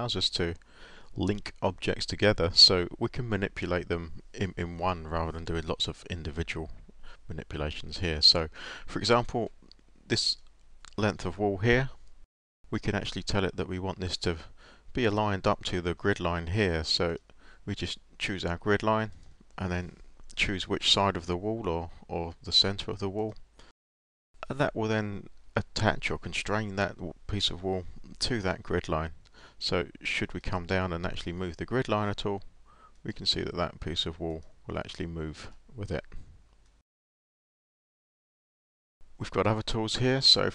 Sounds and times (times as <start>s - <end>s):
Speech: 0.0s - 0.6s, 1.2s - 12.0s, 12.7s - 23.4s, 24.4s - 36.2s, 39.2s - 40.5s.